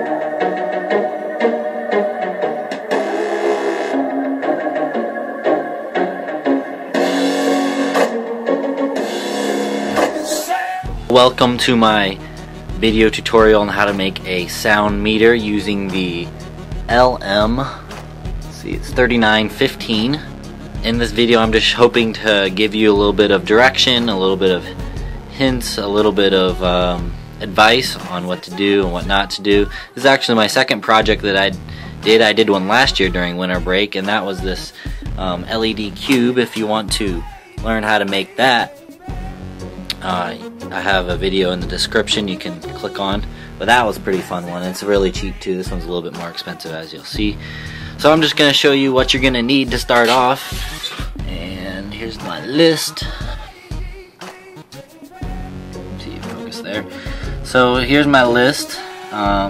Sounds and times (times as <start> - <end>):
Music: 0.0 - 59.4
Speech: 11.1 - 12.2, 12.8 - 16.3, 16.9 - 17.8, 18.6 - 38.8, 39.9 - 47.4, 48.0 - 50.6, 51.2 - 53.2, 56.0 - 59.4.